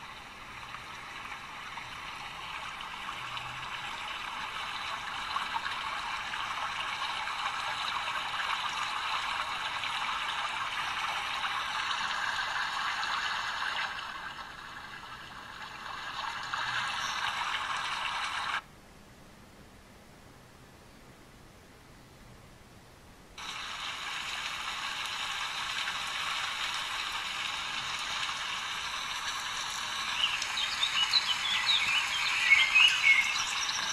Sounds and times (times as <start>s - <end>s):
Water: 0.0s - 18.7s, 23.3s - 33.9s.